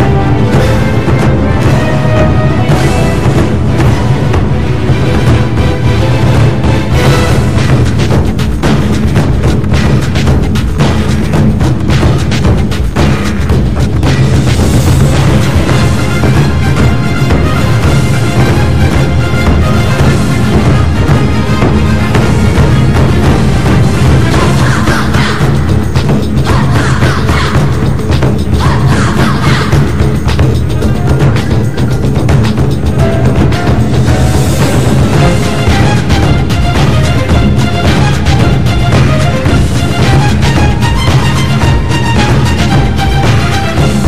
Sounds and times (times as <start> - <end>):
Percussion: 0.0 - 44.0.